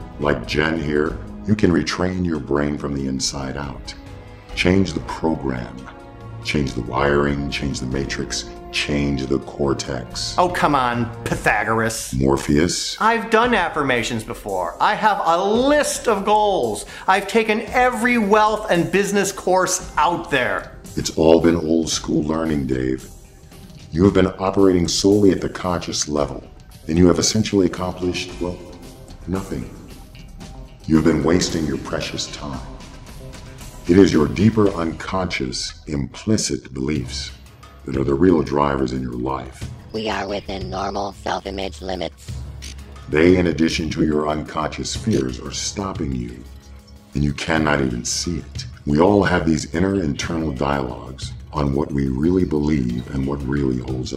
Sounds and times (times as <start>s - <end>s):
Music: 0.0s - 54.1s
Speech: 0.2s - 4.0s, 4.6s - 23.1s, 23.9s - 29.8s, 30.9s - 32.7s, 33.9s - 42.2s, 43.1s - 46.5s, 47.2s - 54.1s.